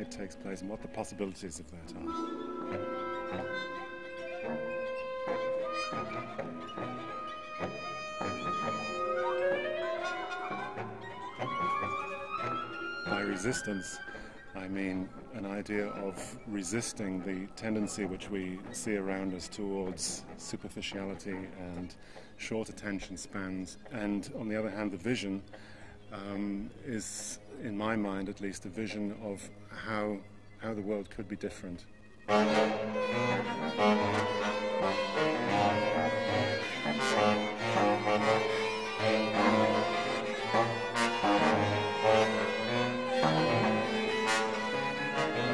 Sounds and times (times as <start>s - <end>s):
Speech: 0.0s - 2.1s, 13.1s - 14.0s, 14.6s - 25.5s, 26.1s - 31.9s
Classical music: 0.0s - 20.6s, 32.2s - 45.5s
Orchestra: 0.0s - 21.9s, 31.9s - 45.5s
Bowed string instrument: 0.0s - 27.8s, 32.2s - 45.5s.